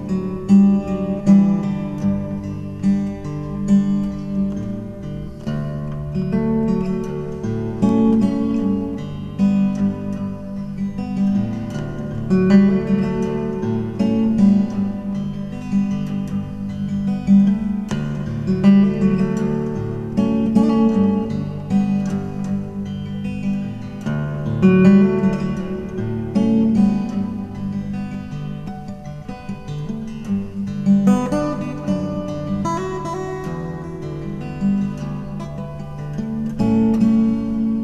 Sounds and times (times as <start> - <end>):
Acoustic guitar: 0.0 - 37.8
Strum: 0.0 - 37.8.